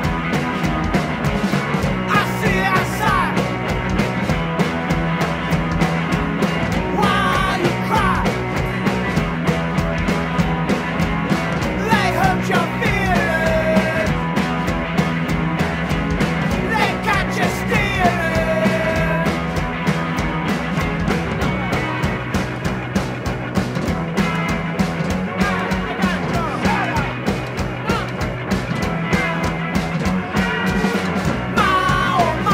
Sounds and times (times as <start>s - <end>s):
Music: 0.0s - 32.5s.